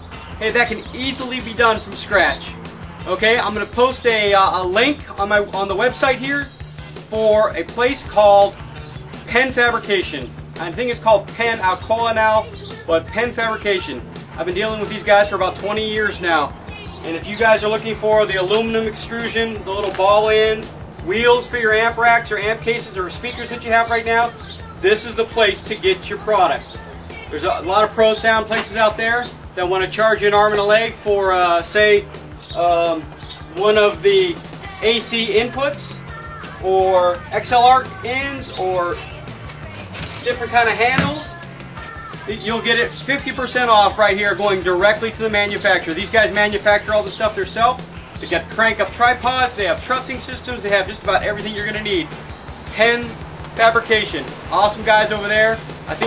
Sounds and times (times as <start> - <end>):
Music: 0.0 - 56.0
Speech: 0.4 - 2.5, 3.1 - 6.5, 7.1 - 8.6, 9.3 - 26.6, 27.3 - 32.0, 32.6 - 36.0, 36.6 - 39.1, 40.1 - 41.4, 42.2 - 52.1, 52.7 - 56.0.